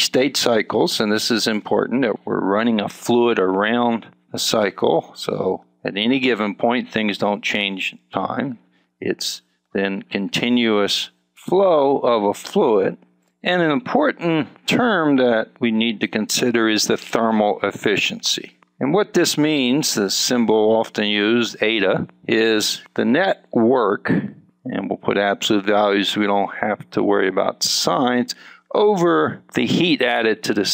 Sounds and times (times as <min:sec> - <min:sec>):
Speech: 0:00.0 - 0:30.7.